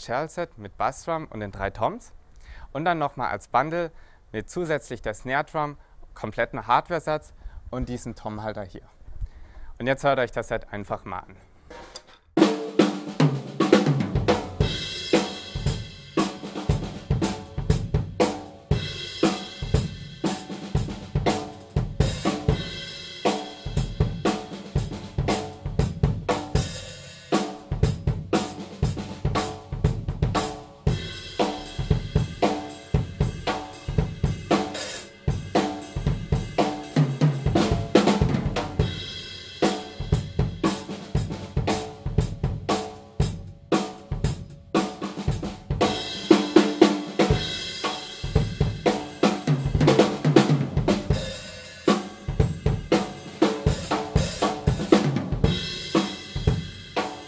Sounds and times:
Drum kit: 11.7 - 57.2
Bass drum: 13.2 - 22.9, 23.6 - 26.8, 27.6 - 44.5, 47.2 - 51.3, 52.3 - 57.0.

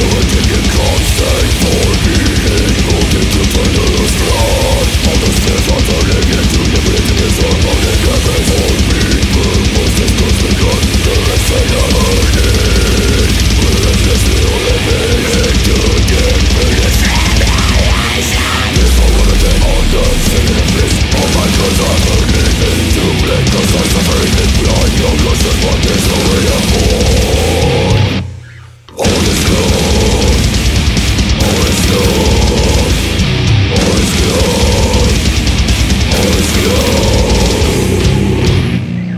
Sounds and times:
Soundtrack music: 0.0 - 28.4
Pop music: 13.3 - 27.8.

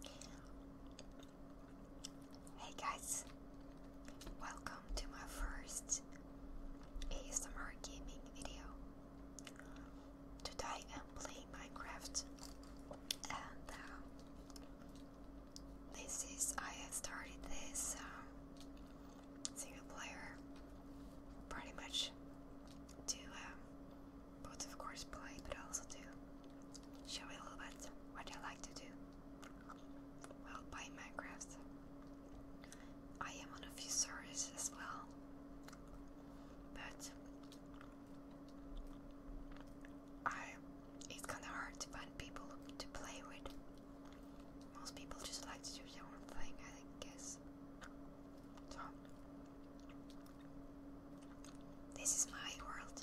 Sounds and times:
Whispering: 0.0 - 1.2, 2.5 - 3.4, 4.1 - 6.2, 7.0 - 8.8, 9.4 - 12.3, 13.1 - 14.2, 15.9 - 18.4, 19.5 - 20.4, 21.5 - 22.2, 23.0 - 23.7, 24.4 - 26.2, 27.0 - 31.7, 33.2 - 35.2, 36.7 - 37.3, 40.2 - 43.6, 44.7 - 47.4, 48.6 - 49.1, 51.9 - 53.0.

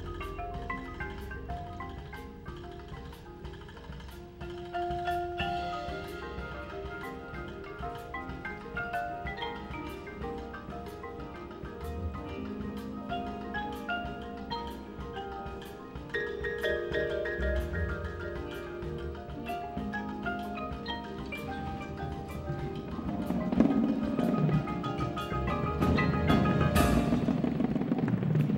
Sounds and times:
Glockenspiel: 0.0 - 27.9
Marimba, xylophone: 0.0 - 28.5.

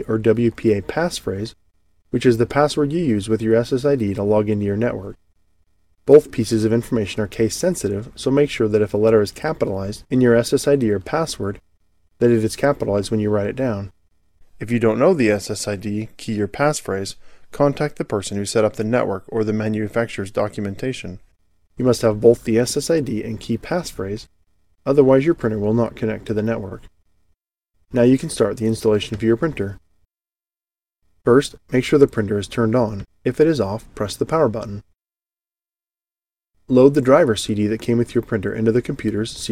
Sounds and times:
Speech: 0.0 - 1.6, 2.2 - 5.2, 6.1 - 11.6, 12.2 - 14.0, 14.6 - 24.3, 24.9 - 26.9, 27.9 - 29.8, 31.3 - 34.9, 36.7 - 39.5.

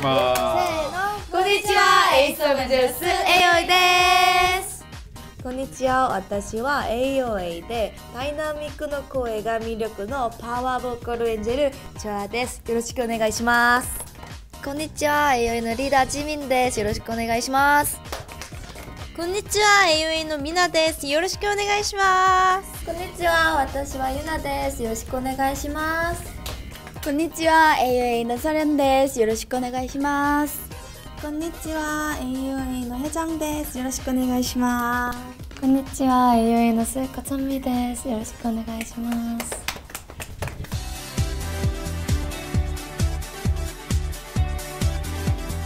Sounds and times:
Music: 0.0 - 45.6.

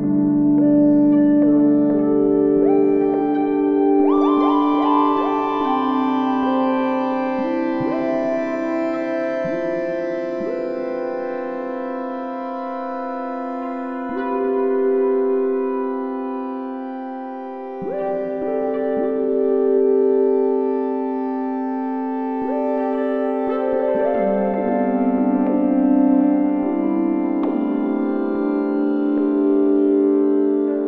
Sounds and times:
Ambient music: 0.0 - 30.8
Electric piano: 0.0 - 30.8
Electronica: 0.0 - 30.8
New-age music: 0.0 - 30.8
Synthesizer: 0.0 - 30.8.

